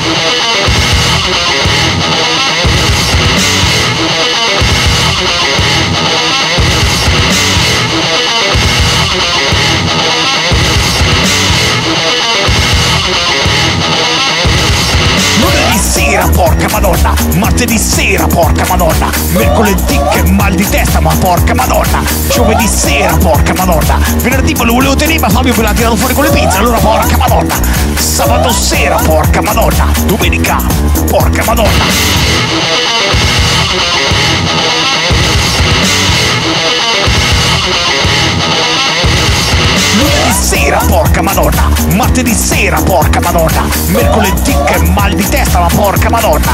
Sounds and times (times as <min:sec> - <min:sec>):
Music: 0:00.0 - 0:46.5.